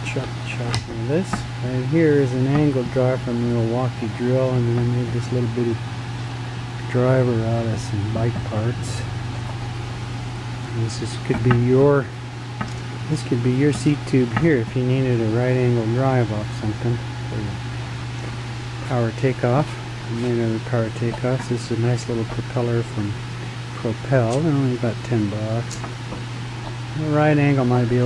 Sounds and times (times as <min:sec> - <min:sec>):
Speech: 0:00.0 - 0:05.8, 0:06.9 - 0:09.1, 0:10.7 - 0:12.1, 0:13.1 - 0:17.6, 0:18.9 - 0:23.2, 0:23.8 - 0:25.7, 0:27.0 - 0:28.0.